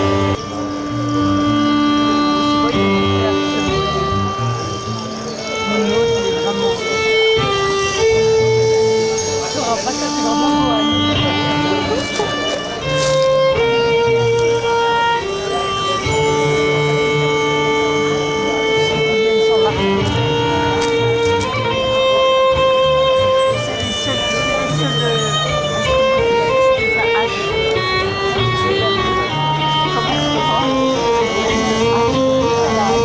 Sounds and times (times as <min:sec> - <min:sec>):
Violin, fiddle: 0:00.0 - 0:33.0.